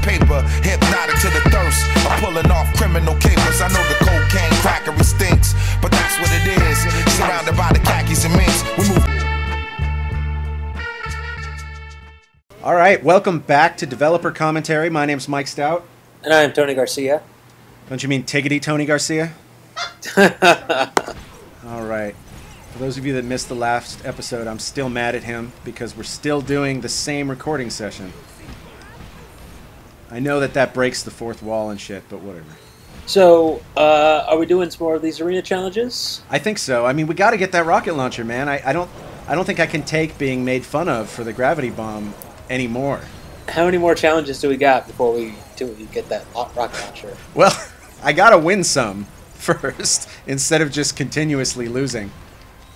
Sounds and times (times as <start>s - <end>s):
Speech: 12.6s - 17.3s, 17.9s - 19.4s, 21.6s - 22.2s, 22.8s - 28.2s, 30.1s - 52.1s.